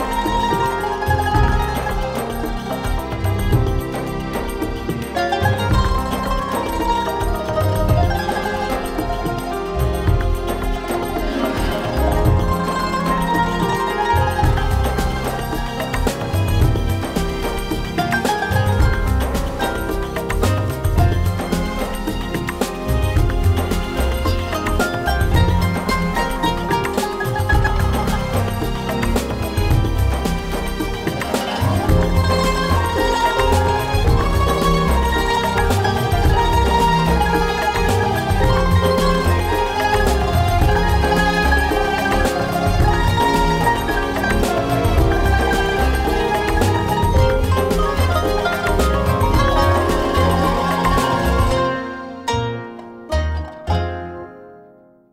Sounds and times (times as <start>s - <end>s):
Music: 0.0s - 55.1s.